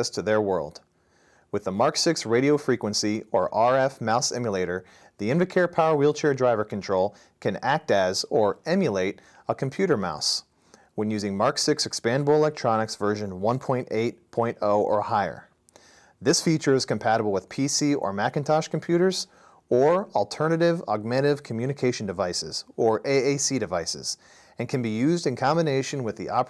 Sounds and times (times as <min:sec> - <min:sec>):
Speech: 0:00.0 - 0:00.9, 0:01.5 - 0:15.6, 0:16.2 - 0:26.4.